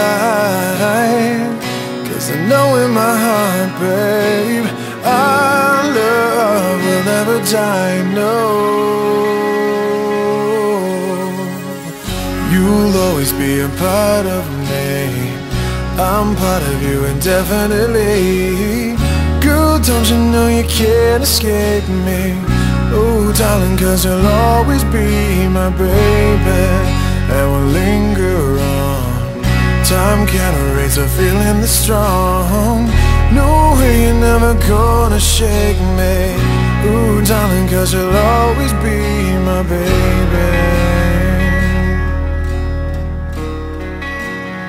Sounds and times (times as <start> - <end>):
Background music: 0.0 - 44.6.